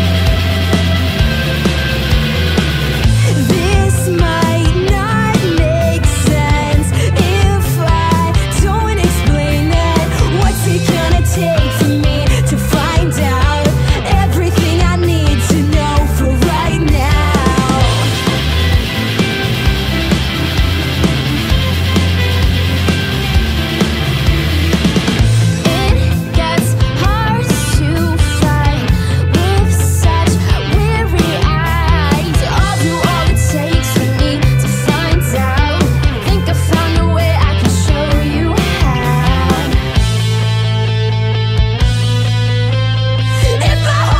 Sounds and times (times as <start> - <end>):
Music: 0.0 - 44.1.